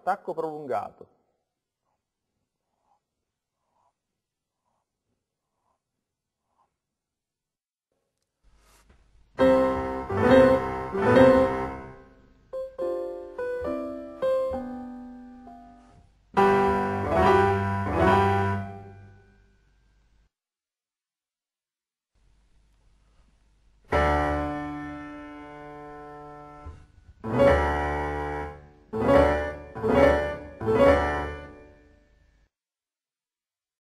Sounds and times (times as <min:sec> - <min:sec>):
Music: 0:09.4 - 0:19.7, 0:23.9 - 0:32.5.